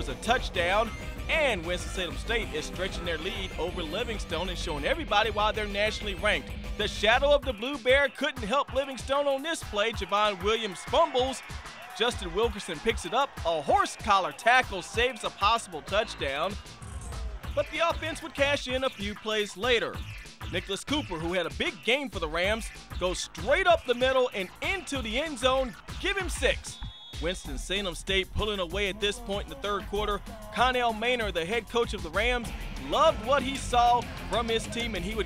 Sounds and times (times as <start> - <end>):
Speech: 0.0 - 16.6, 17.6 - 35.2
Music: 0.0 - 35.2.